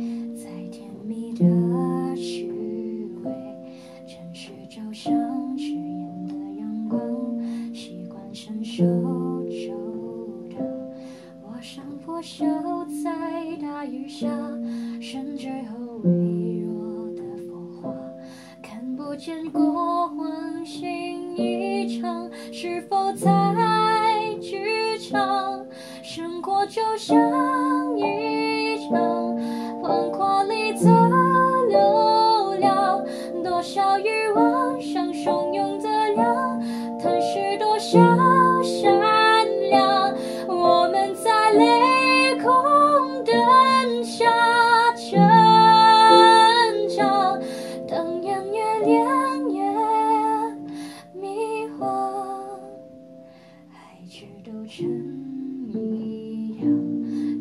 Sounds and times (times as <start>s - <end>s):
Music: 0.0s - 57.4s.